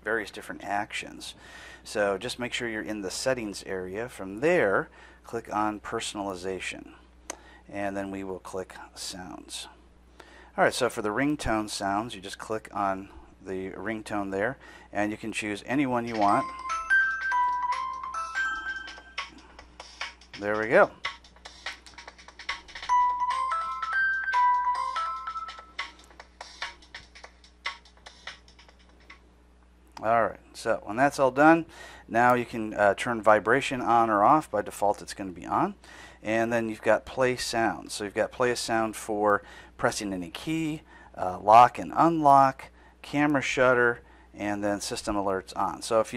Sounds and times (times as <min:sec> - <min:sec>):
Speech: 0:00.0 - 0:07.0, 0:07.7 - 0:09.8, 0:10.6 - 0:16.5, 0:20.4 - 0:21.0, 0:30.0 - 0:46.1
Ringtone: 0:16.1 - 0:29.2
Music: 0:16.1 - 0:29.3.